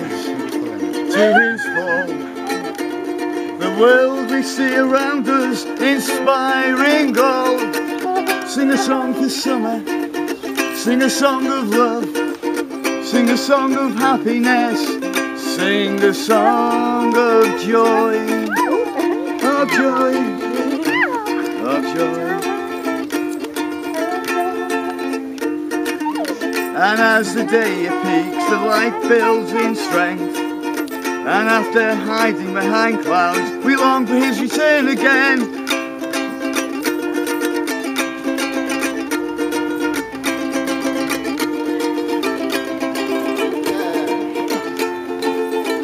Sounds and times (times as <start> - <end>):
Male singing: 0.0 - 2.8, 3.6 - 12.2, 12.9 - 23.0, 23.9 - 25.1, 26.5 - 35.7, 41.5 - 44.9
Music: 0.0 - 45.8.